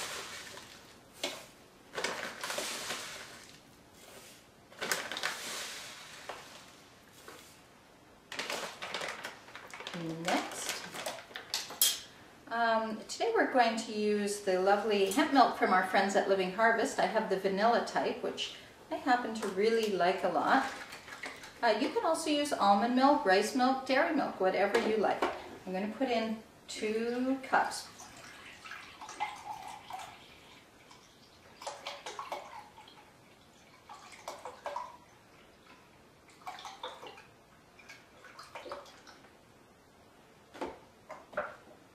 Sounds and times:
Speech: 0:09.9 - 0:10.9, 0:12.5 - 0:20.8, 0:21.6 - 0:27.9.

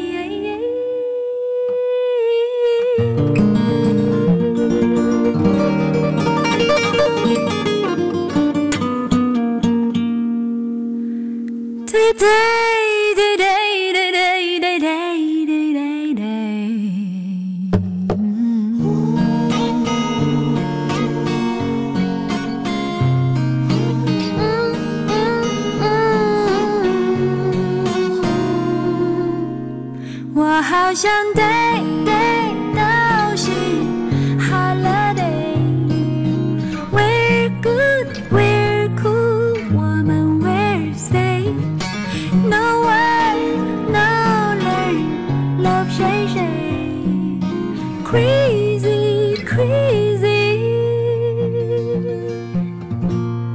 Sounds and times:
Music: 0:00.0 - 0:53.5.

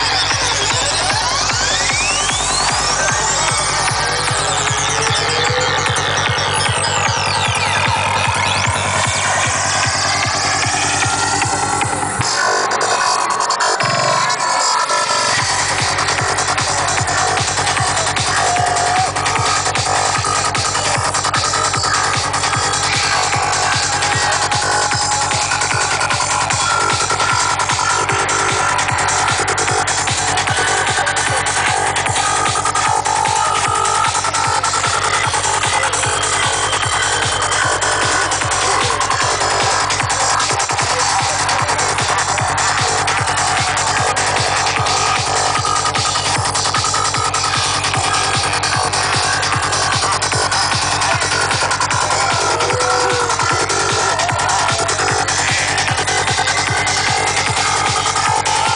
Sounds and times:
Speech: 0:00.0 - 0:05.8, 0:12.3 - 0:46.8
Music: 0:00.0 - 0:58.7.

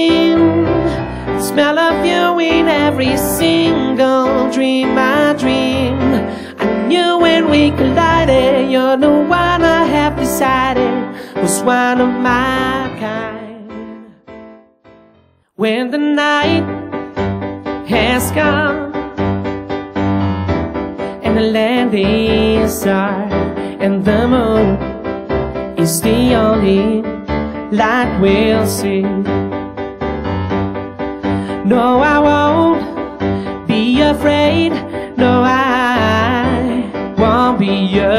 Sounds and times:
Piano: 0:00.0 - 0:38.1.

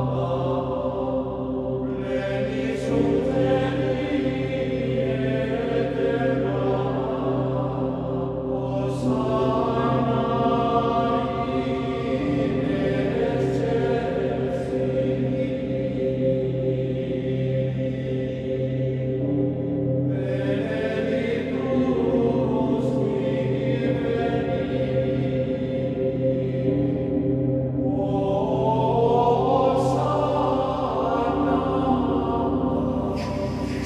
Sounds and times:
Music: 0:00.0 - 0:33.8.

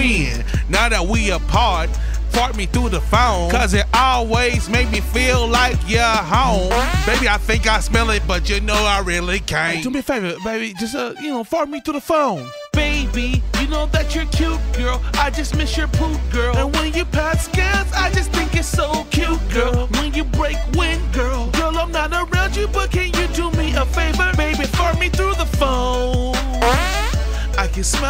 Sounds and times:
Speech: 0:00.0 - 0:04.1, 0:05.5 - 0:12.5
Music: 0:00.0 - 0:28.1.

